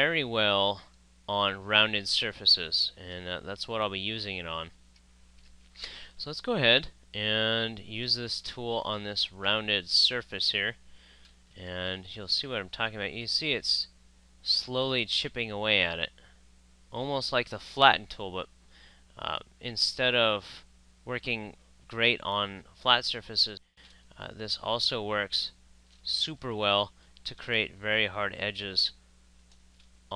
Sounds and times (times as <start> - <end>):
Speech: 0.0 - 4.8, 6.2 - 10.8, 11.6 - 16.2, 16.9 - 18.5, 19.2 - 29.0.